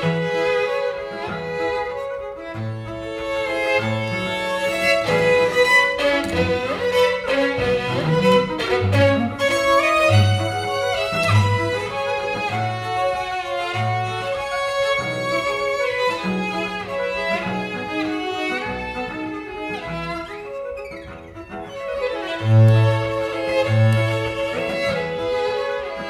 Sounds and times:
Cello: 0.0s - 26.1s
Piano: 0.0s - 26.1s
String section: 0.0s - 26.1s
Violin, fiddle: 0.0s - 26.1s.

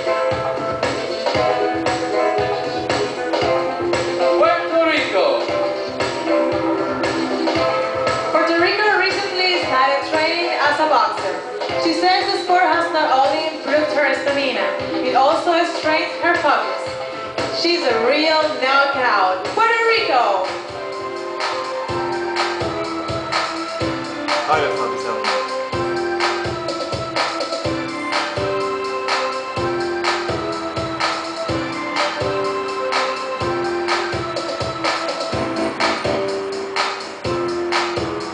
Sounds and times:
Music: 0.0s - 38.3s
Female speech, woman speaking: 8.4s - 16.8s, 17.6s - 20.5s.

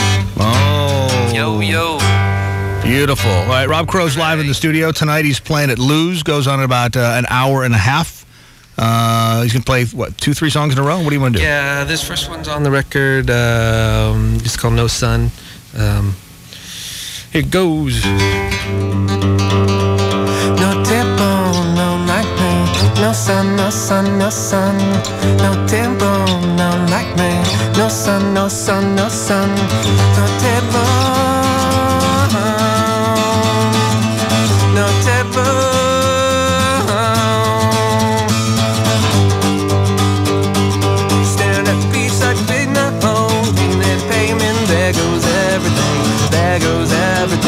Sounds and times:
Music: 0.0s - 5.4s, 17.9s - 47.4s.

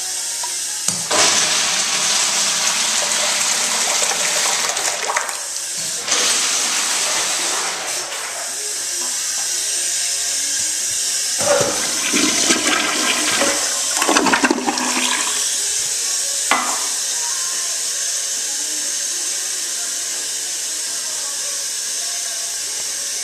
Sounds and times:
Music: 0.0s - 4.6s, 15.9s - 23.2s
Toilet flush: 1.0s - 9.6s, 11.3s - 17.1s.

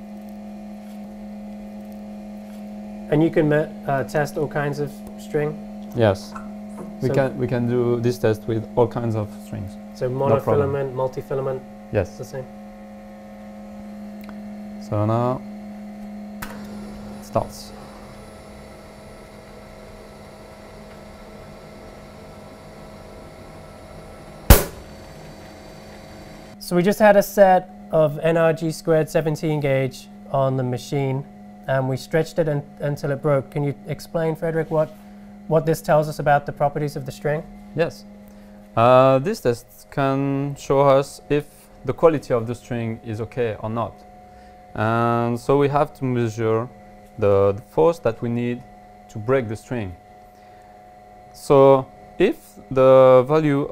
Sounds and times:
Speech: 3.1s - 12.5s, 14.8s - 15.5s, 17.2s - 17.8s, 26.6s - 38.1s, 38.8s - 44.0s, 44.8s - 50.0s, 51.4s - 53.7s.

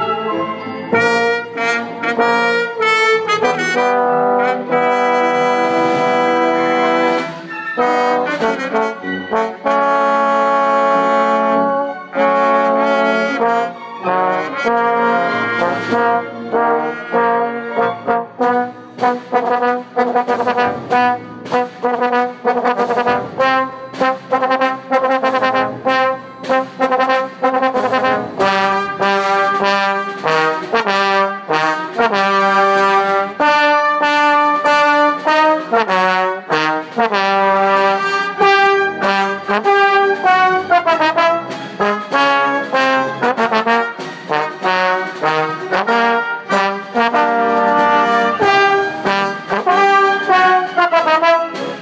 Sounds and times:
Trombone: 0.0s - 51.8s
Trumpet: 0.0s - 51.8s.

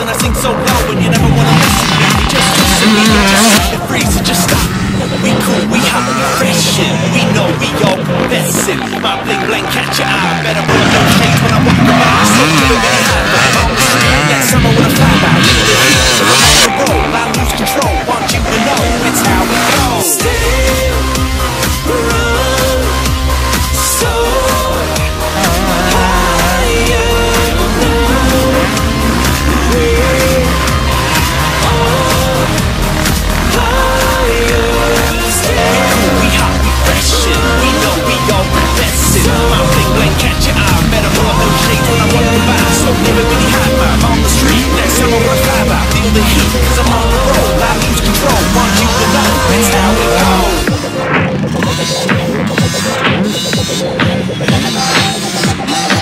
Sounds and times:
Motorcycle: 0.0s - 56.0s
Music: 0.0s - 56.0s
Outside, urban or manmade: 0.0s - 56.0s.

